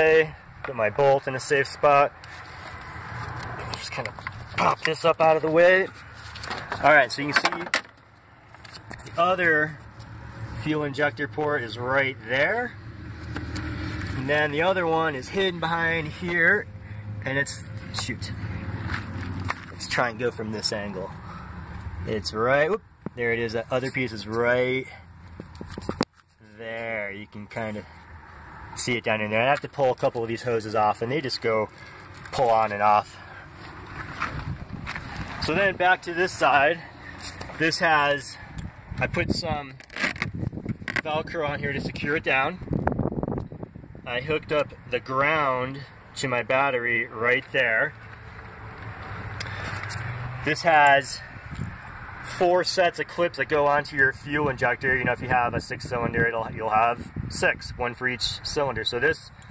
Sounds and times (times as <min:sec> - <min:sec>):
Speech: 0:00.0 - 0:02.1, 0:03.7 - 0:05.9, 0:06.8 - 0:07.8, 0:09.1 - 0:09.8, 0:10.6 - 0:12.7, 0:14.2 - 0:18.4, 0:19.8 - 0:21.2, 0:22.1 - 0:25.0, 0:26.4 - 0:27.9, 0:28.8 - 0:31.7, 0:32.3 - 0:33.2, 0:35.4 - 0:36.9, 0:37.6 - 0:38.4, 0:39.0 - 0:39.8, 0:41.0 - 0:42.6, 0:44.0 - 0:48.0, 0:50.4 - 0:51.3, 0:52.3 - 0:59.3.